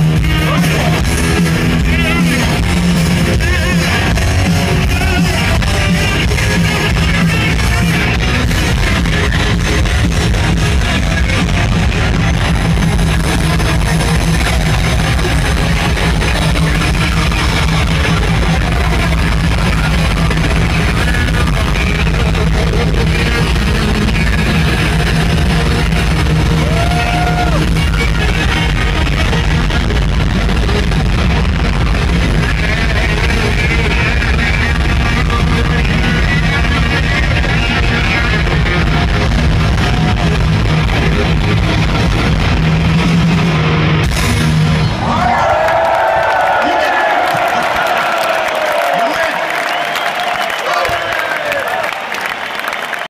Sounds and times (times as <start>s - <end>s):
Music: 0.0s - 45.7s
Speech: 48.8s - 49.5s.